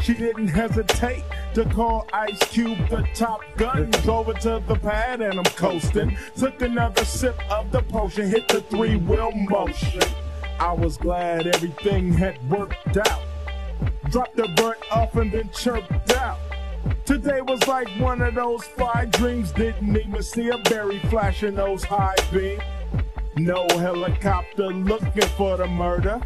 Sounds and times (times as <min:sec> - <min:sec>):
Funk: 0:00.0 - 0:26.2
Hip hop music: 0:00.0 - 0:26.2.